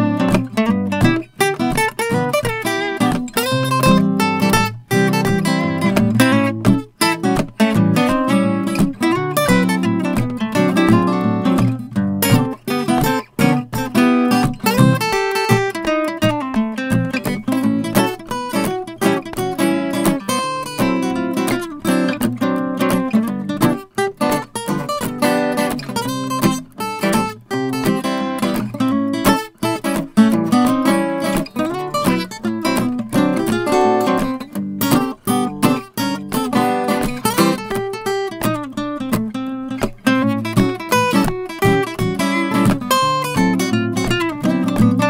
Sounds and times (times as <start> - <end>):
Acoustic guitar: 0.0 - 45.0
Strum: 0.0 - 45.0.